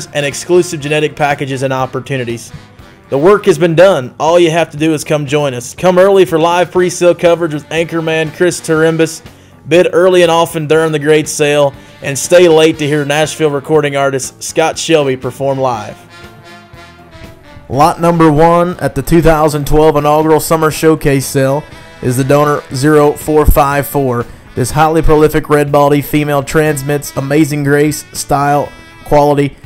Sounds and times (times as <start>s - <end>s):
Speech: 0.0s - 16.0s, 17.7s - 29.6s
Music: 0.0s - 29.6s.